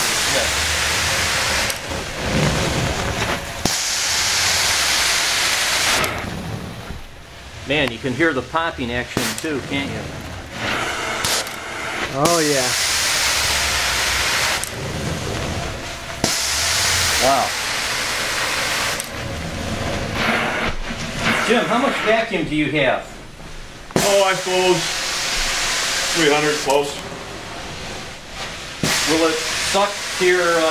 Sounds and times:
White noise: 0:00.0 - 0:30.7.

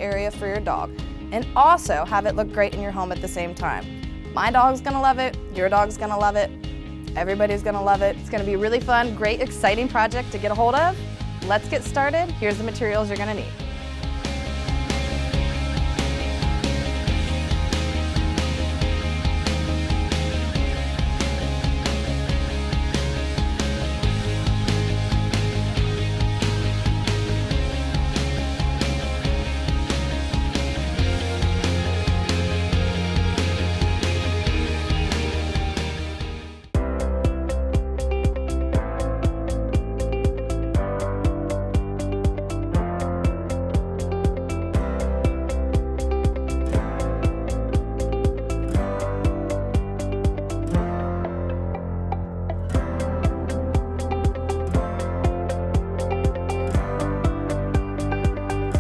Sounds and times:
Speech: 0:00.0 - 0:06.5, 0:07.2 - 0:13.6
Music: 0:00.0 - 0:58.8.

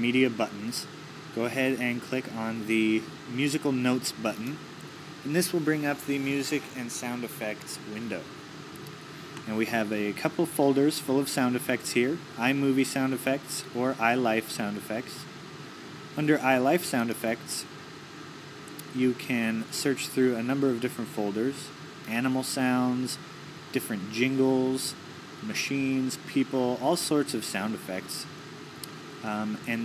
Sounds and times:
Speech: 0:00.0 - 0:04.6, 0:05.2 - 0:08.3, 0:09.4 - 0:15.3, 0:16.2 - 0:17.7, 0:18.8 - 0:28.3, 0:29.2 - 0:29.8.

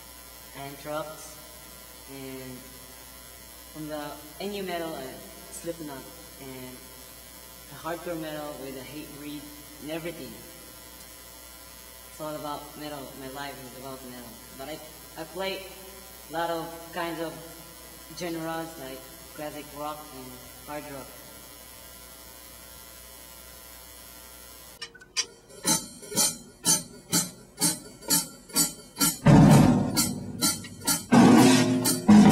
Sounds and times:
Electric shaver, electric razor: 0:00.0 - 0:24.9
Speech: 0:00.5 - 0:01.4, 0:02.1 - 0:02.7, 0:03.8 - 0:06.8, 0:07.7 - 0:10.5, 0:12.2 - 0:17.5, 0:18.1 - 0:21.2.

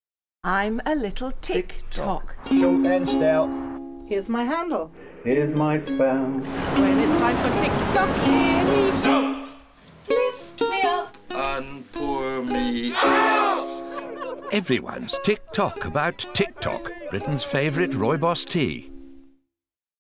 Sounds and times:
Music: 0:02.3 - 0:04.4, 0:05.0 - 0:19.5
Speech: 0:14.5 - 0:18.9.

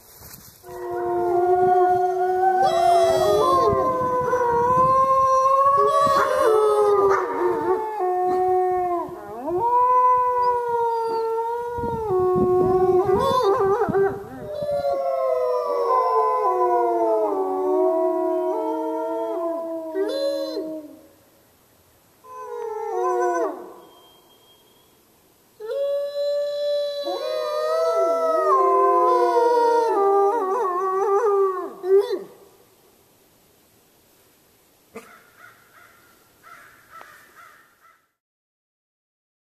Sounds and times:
Howl: 0:00.6 - 0:21.1, 0:22.3 - 0:24.7, 0:25.6 - 0:32.4.

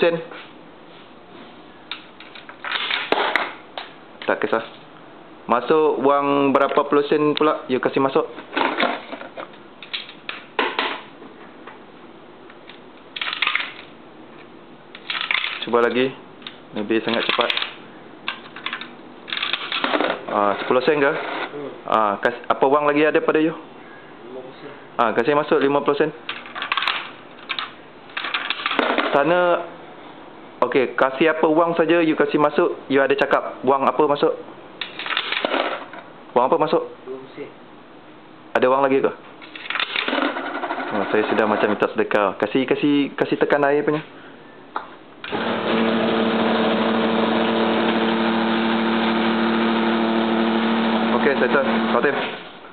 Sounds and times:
Speech: 0:00.0 - 0:00.3, 0:04.2 - 0:04.8, 0:05.5 - 0:08.3, 0:15.7 - 0:16.2, 0:16.8 - 0:17.6, 0:24.2 - 0:26.2, 0:29.1 - 0:29.7, 0:30.6 - 0:34.4, 0:36.4 - 0:37.6, 0:38.5 - 0:39.2, 0:40.9 - 0:44.1, 0:51.1 - 0:52.3.

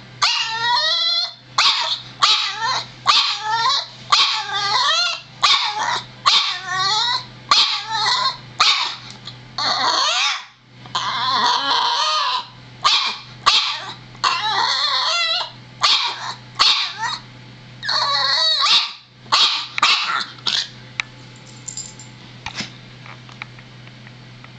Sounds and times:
Canidae, dogs, wolves: 0:00.2 - 0:09.0, 0:09.6 - 0:20.7
Bark: 0:01.6 - 0:03.5, 0:04.1 - 0:04.5, 0:05.4 - 0:06.7, 0:07.5 - 0:07.9, 0:08.6 - 0:09.0, 0:12.3 - 0:14.0, 0:15.8 - 0:17.2, 0:18.6 - 0:20.6.

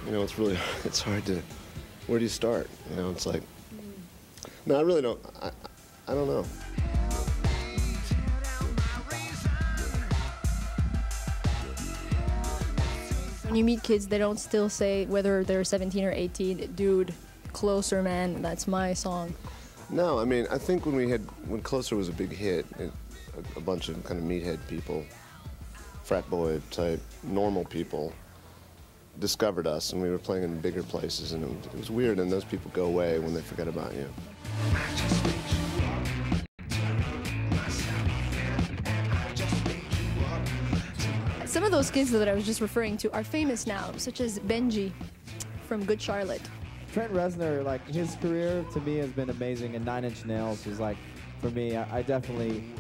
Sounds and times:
Music: 0:00.0 - 0:52.8.

